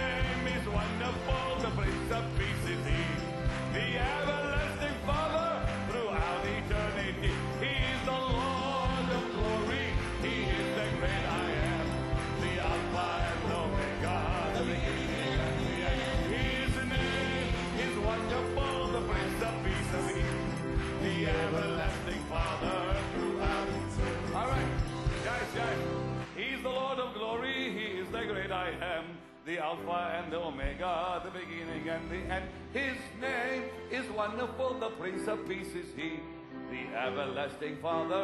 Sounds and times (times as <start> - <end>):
Music: 0.0 - 38.2.